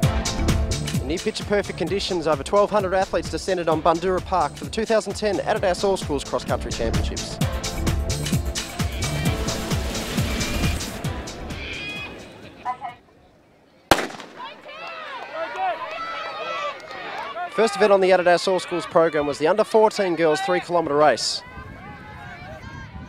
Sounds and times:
Outside, urban or manmade: 0:00.0 - 0:23.0
Speech: 0:01.0 - 0:07.4, 0:17.4 - 0:21.5.

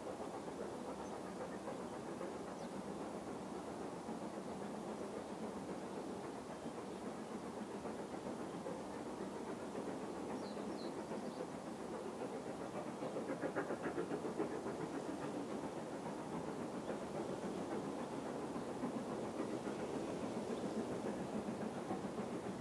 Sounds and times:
Train: 0:00.0 - 0:22.6.

